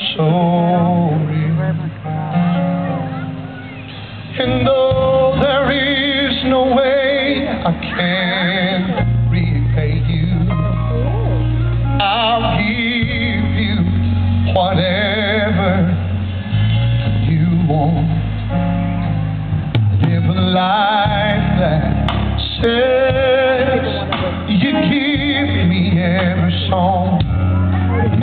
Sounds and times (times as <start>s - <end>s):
Male singing: 0.0s - 2.2s, 4.3s - 11.0s, 12.0s - 16.2s, 17.0s - 18.3s, 20.0s - 28.2s
Music: 0.0s - 28.2s.